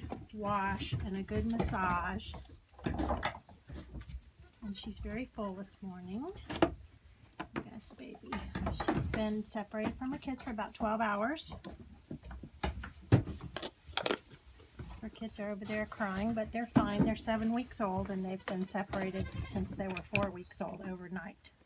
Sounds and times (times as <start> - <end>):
Speech: 0.4 - 2.4, 4.6 - 6.4, 7.6 - 11.6, 15.0 - 21.5.